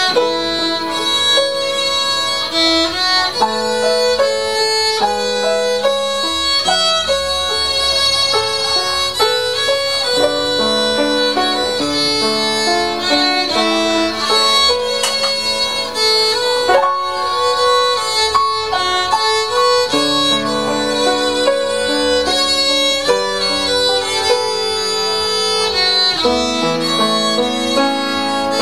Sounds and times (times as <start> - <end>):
Violin, fiddle: 0.0 - 28.6.